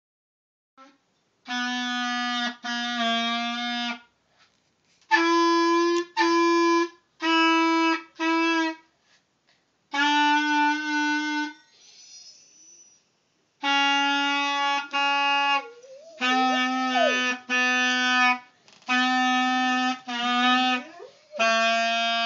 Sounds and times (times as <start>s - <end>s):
Clarinet: 0.8s - 4.1s, 5.1s - 8.9s, 9.9s - 11.6s, 13.6s - 22.2s.